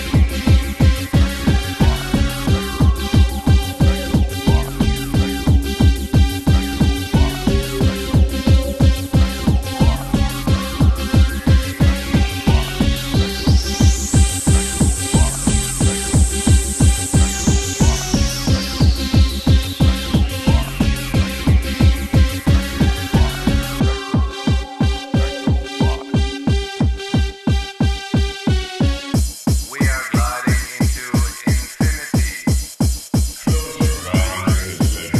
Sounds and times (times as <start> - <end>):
Techno: 0.0 - 35.1.